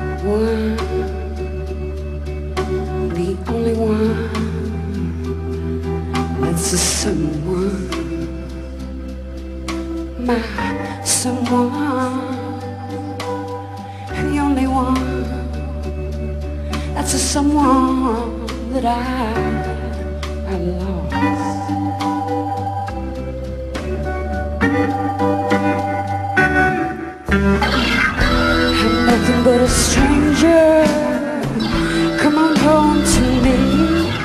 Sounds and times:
Music: 0.0 - 34.2.

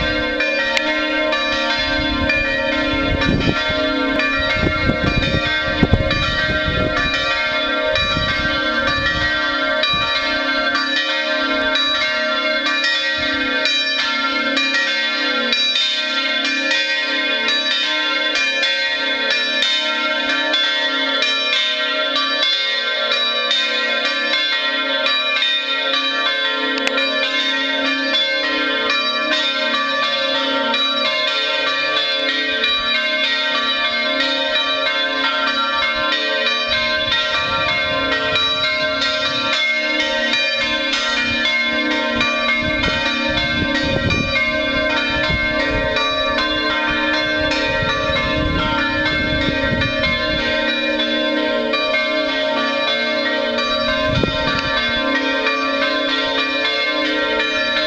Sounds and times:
Change ringing (campanology): 0.0 - 57.8
Church bell: 0.0 - 57.8.

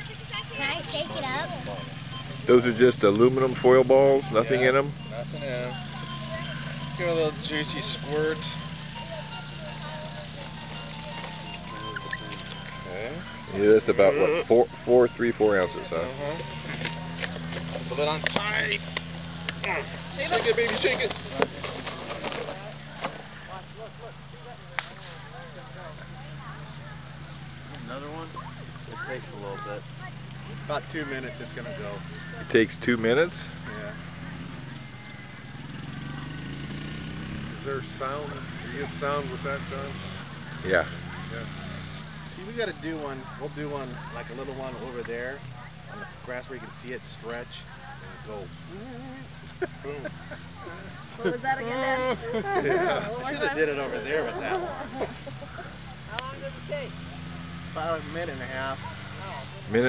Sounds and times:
Music: 0.0 - 3.6, 4.2 - 18.8.

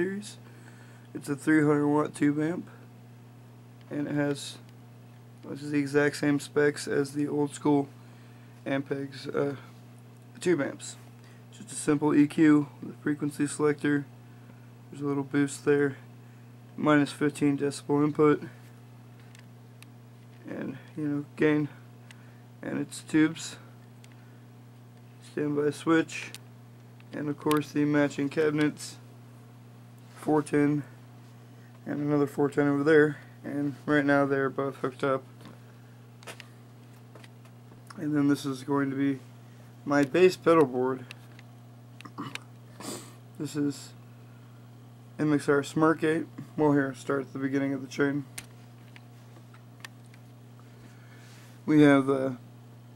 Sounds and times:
Speech: 0.0 - 0.4, 1.2 - 2.8, 3.9 - 4.7, 5.4 - 8.0, 8.6 - 9.7, 10.4 - 14.1, 14.9 - 16.0, 16.8 - 18.6, 20.4 - 21.8, 22.6 - 23.7, 25.2 - 26.4, 27.2 - 29.0, 30.2 - 31.0, 31.8 - 35.3, 37.9 - 39.2, 39.8 - 41.1, 43.4 - 44.0, 45.2 - 48.3, 51.7 - 52.4.

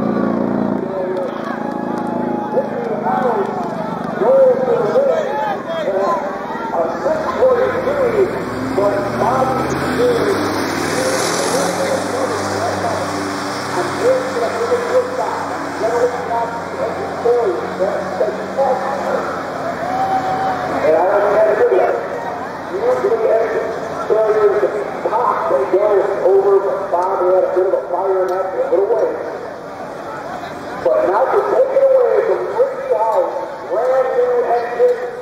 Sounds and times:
Speech: 0.8 - 1.6, 2.5 - 19.4, 20.8 - 29.4, 30.0 - 35.2.

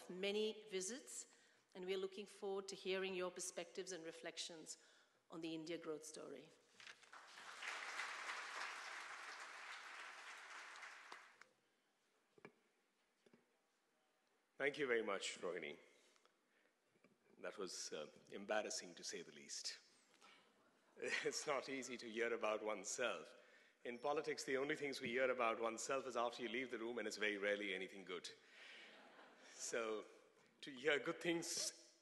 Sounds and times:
Female speech, woman speaking: 0.0 - 6.5
Narration, monologue: 0.0 - 7.3, 11.4 - 32.0
Male speech, man speaking: 14.6 - 15.9, 17.4 - 19.9, 21.0 - 28.4, 29.5 - 31.8.

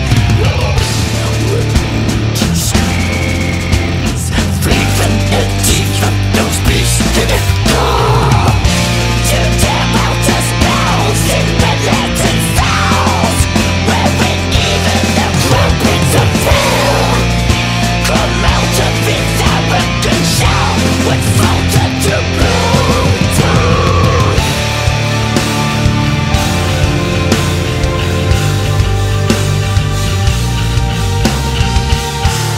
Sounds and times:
Angry music: 0.0 - 32.5.

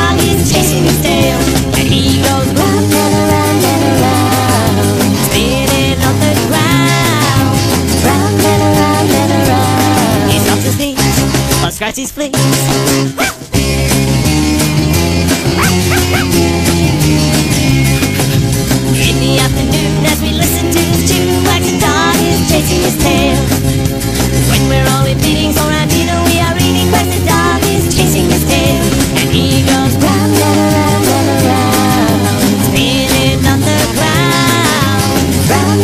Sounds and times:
Music: 0.0 - 35.8
Dog: 13.2 - 13.4, 15.6 - 16.4.

